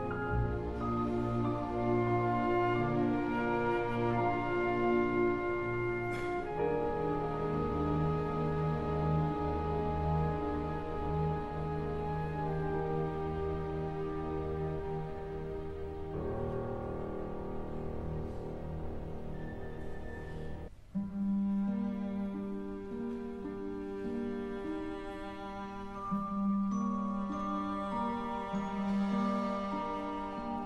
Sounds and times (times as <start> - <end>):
Piano: 0.0 - 30.6.